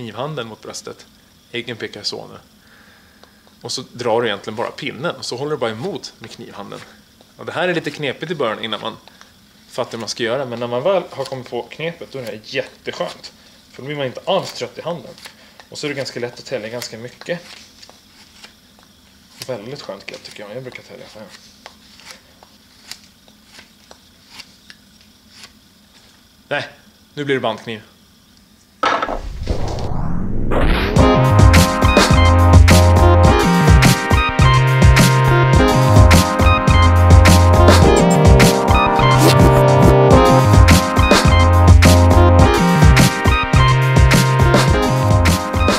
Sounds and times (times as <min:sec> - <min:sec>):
Speech: 0:00.0 - 0:02.5, 0:03.6 - 0:09.1, 0:09.7 - 0:17.5, 0:19.4 - 0:21.4, 0:26.5 - 0:28.0.